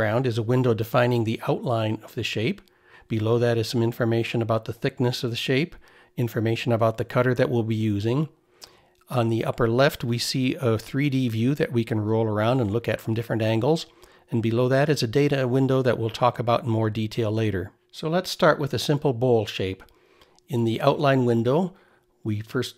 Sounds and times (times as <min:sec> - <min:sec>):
Speech: 0:00.0 - 0:08.4, 0:09.1 - 0:19.9, 0:20.5 - 0:22.7.